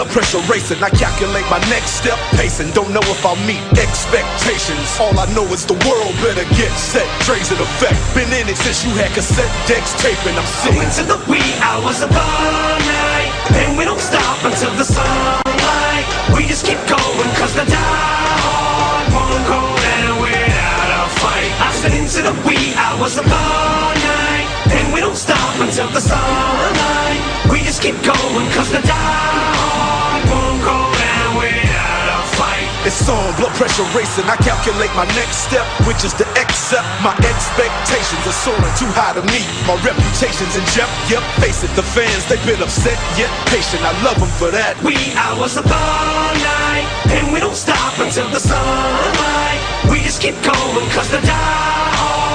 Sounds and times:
Soundtrack music: 0:00.0 - 0:52.3
Tender music: 0:00.0 - 0:52.3.

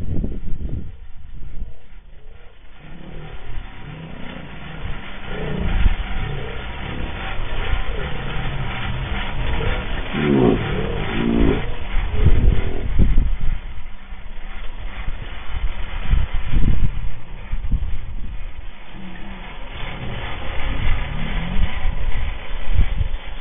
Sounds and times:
Engine: 0:00.0 - 0:23.4.

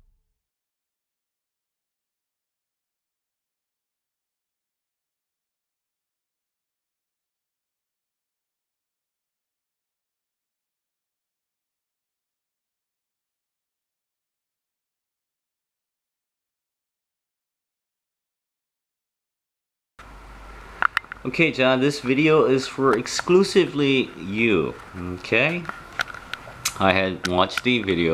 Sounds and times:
Speech: 0:21.3 - 0:25.7, 0:26.7 - 0:28.1.

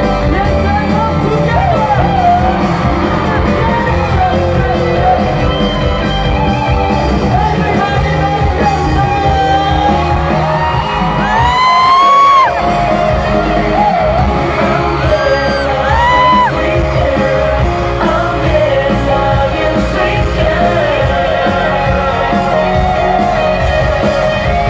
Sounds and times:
Crowd: 0:00.0 - 0:24.6
Pop music: 0:00.0 - 0:24.6
Whoop: 0:10.2 - 0:12.8, 0:14.9 - 0:16.6.

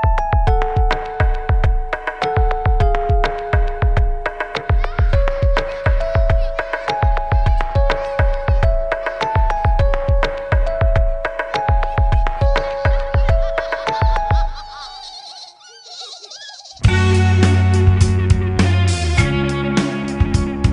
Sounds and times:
Music: 0:00.0 - 0:14.7, 0:16.8 - 0:20.7.

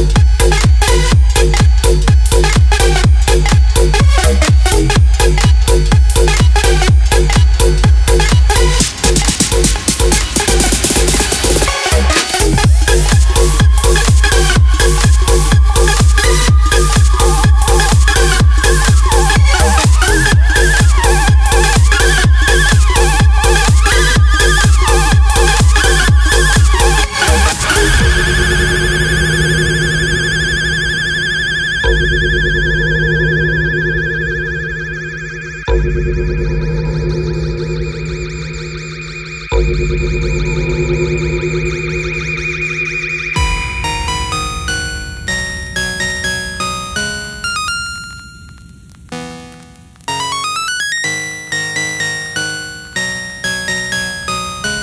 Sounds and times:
Music: 0:00.0 - 0:54.8.

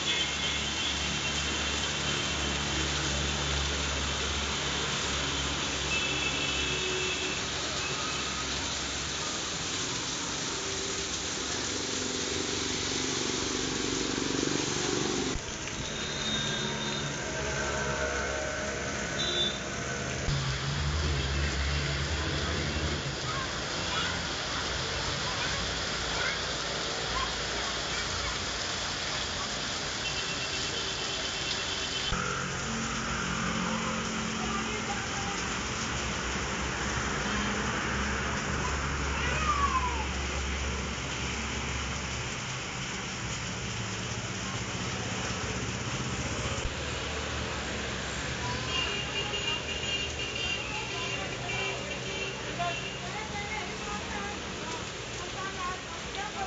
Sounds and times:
Rain on surface: 0:00.0 - 0:56.4
Speech: 0:21.6 - 0:29.6, 0:34.2 - 0:35.6, 0:38.6 - 0:40.5, 0:48.4 - 0:56.4.

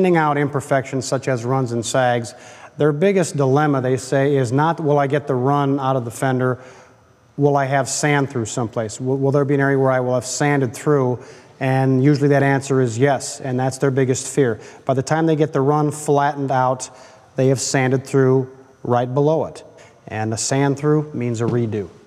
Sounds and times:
Speech: 0:00.0 - 0:06.6, 0:07.4 - 0:22.0.

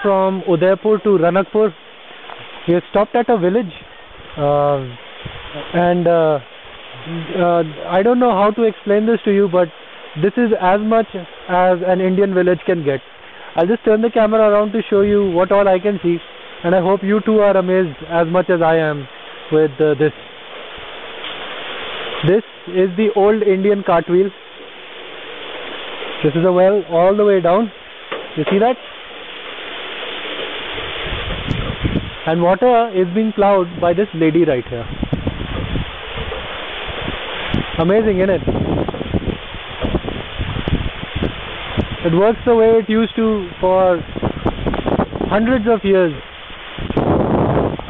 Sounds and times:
Speech: 0:00.0 - 0:01.8, 0:02.7 - 0:03.8, 0:04.4 - 0:05.0, 0:05.6 - 0:06.4, 0:07.0 - 0:13.0, 0:13.6 - 0:20.2, 0:22.2 - 0:24.4, 0:26.2 - 0:27.8, 0:28.4 - 0:28.8, 0:32.2 - 0:34.9, 0:37.8 - 0:38.4, 0:42.0 - 0:44.0, 0:45.3 - 0:46.2.

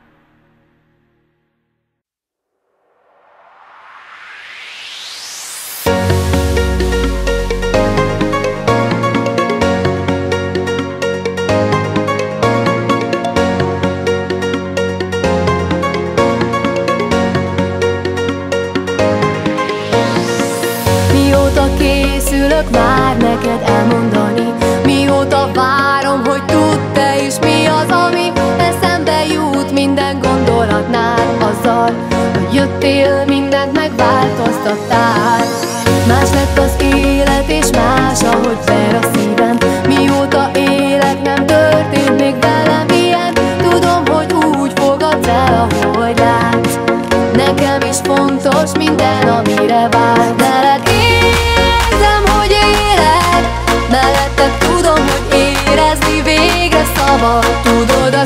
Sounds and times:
Music: 0:00.0 - 0:02.1, 0:04.2 - 0:58.2.

